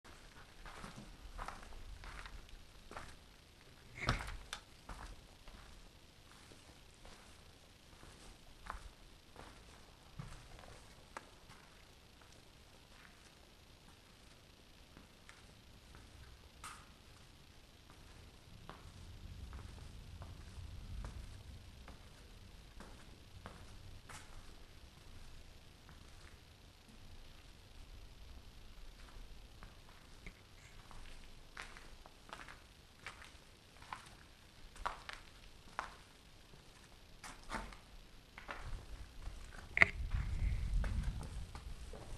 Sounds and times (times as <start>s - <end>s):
Walk, footsteps: 0.1s - 13.3s, 17.9s - 27.0s, 29.0s - 42.1s.